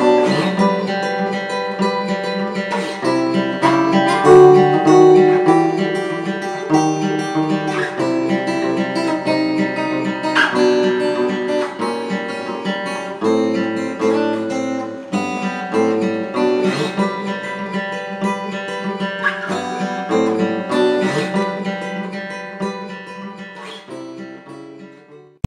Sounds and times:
Acoustic guitar: 0.0s - 25.4s
Strum: 0.0s - 25.4s.

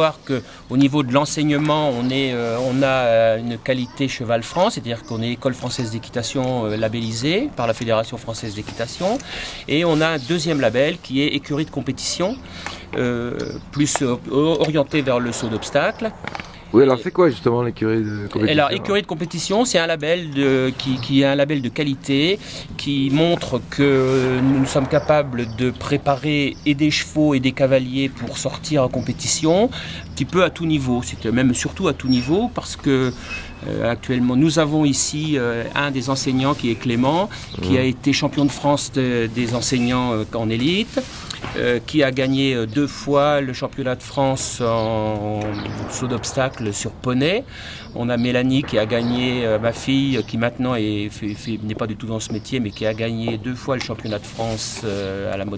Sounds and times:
Speech: 0.0s - 55.5s.

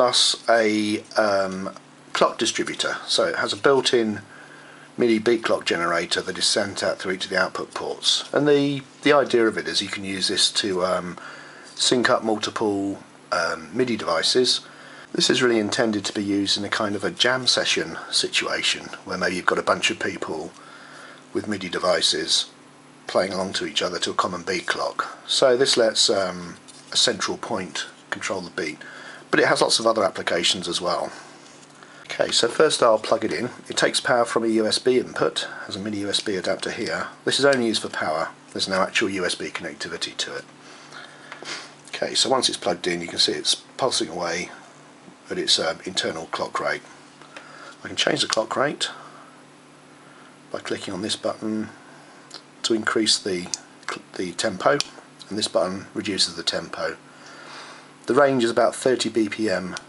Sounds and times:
Speech: 0.0s - 4.3s, 5.0s - 20.7s, 21.3s - 31.3s, 32.0s - 41.1s, 41.9s - 47.0s, 47.8s - 49.1s, 50.5s - 57.0s, 58.1s - 59.8s.

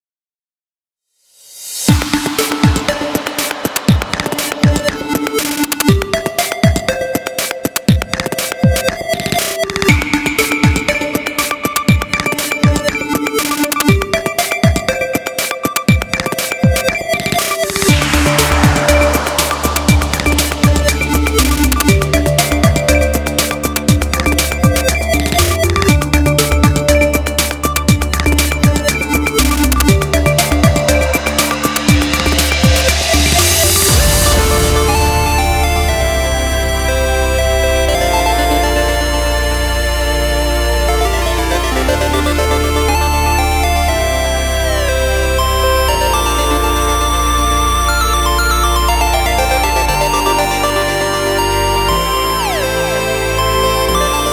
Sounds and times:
Electronic dance music: 1.7s - 54.3s.

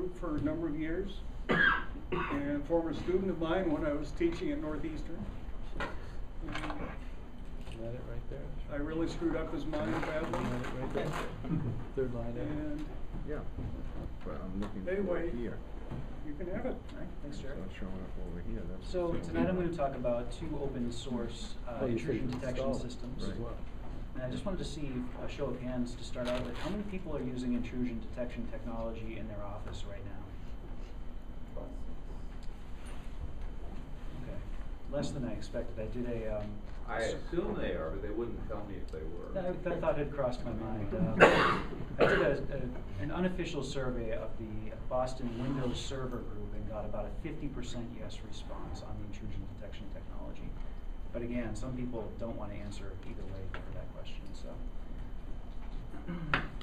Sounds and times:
Speech: 0.0s - 1.2s, 2.2s - 5.3s, 7.7s - 13.5s, 14.2s - 30.4s, 34.2s - 54.7s.

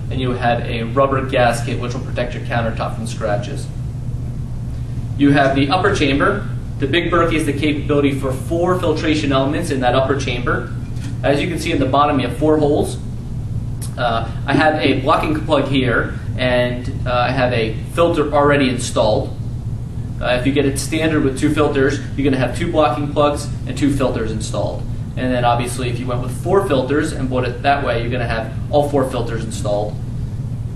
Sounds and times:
Speech: 0.1s - 3.7s, 5.2s - 13.0s, 13.8s - 19.4s, 20.2s - 30.0s.

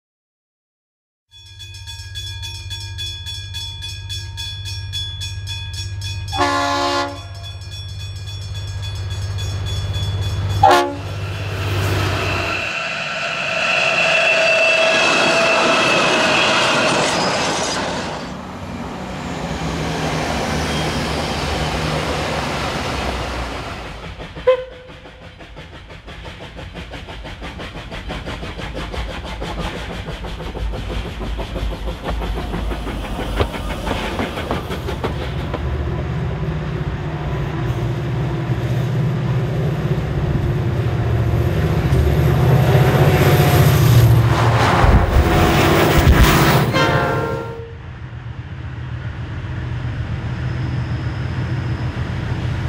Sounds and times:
Railroad car, train wagon: 1.3s - 52.6s
Train horn: 6.3s - 7.4s, 10.6s - 11.2s, 24.4s - 25.0s, 46.6s - 47.9s.

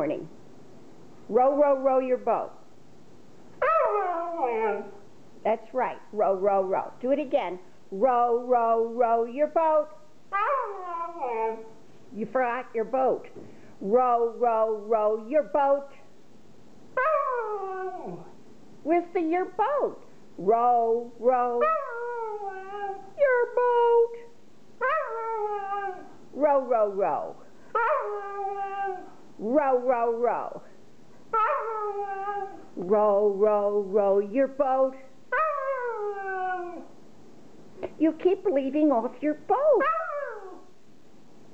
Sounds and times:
Speech: 0.0s - 0.3s, 1.3s - 2.6s, 4.4s - 10.0s, 12.1s - 16.1s, 18.1s - 21.7s, 23.2s - 24.3s, 26.4s - 27.4s, 29.4s - 30.7s, 32.8s - 35.1s, 37.8s - 39.9s.

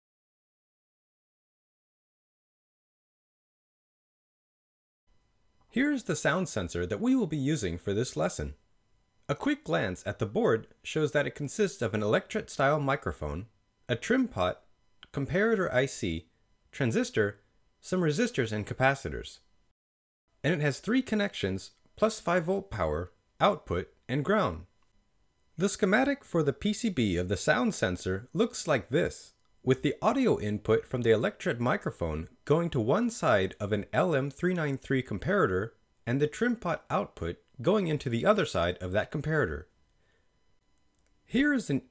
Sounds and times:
Speech: 5.7s - 8.6s, 9.3s - 19.4s, 20.4s - 24.7s, 25.6s - 39.7s, 41.3s - 41.9s.

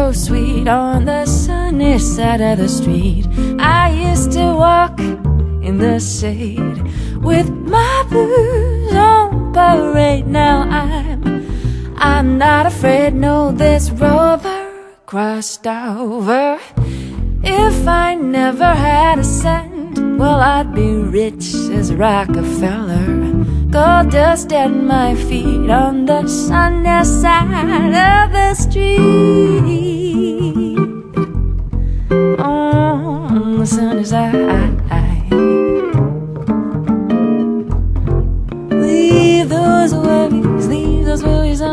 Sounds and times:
Music: 0.0s - 14.7s, 16.6s - 41.7s.

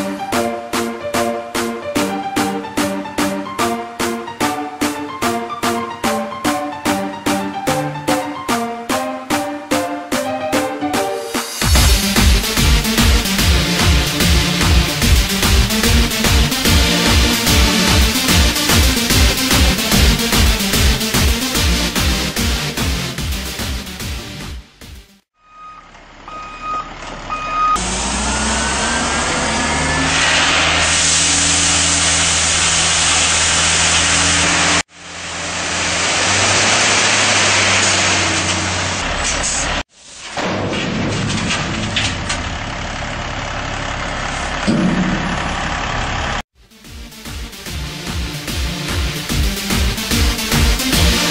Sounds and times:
Truck: 0.0s - 51.3s.

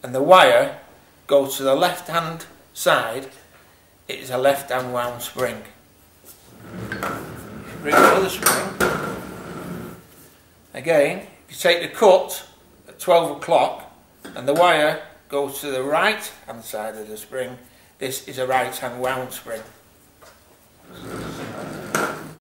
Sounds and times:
Speech: 0.0s - 3.4s, 4.1s - 5.8s, 7.8s - 8.8s, 10.7s - 19.8s.

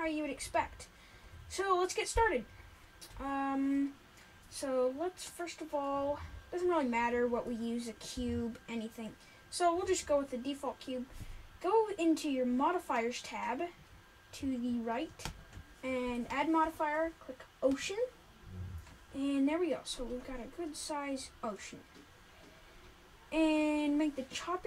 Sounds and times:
Speech: 0.0s - 0.9s, 1.5s - 2.5s, 3.1s - 21.9s, 23.3s - 24.6s.

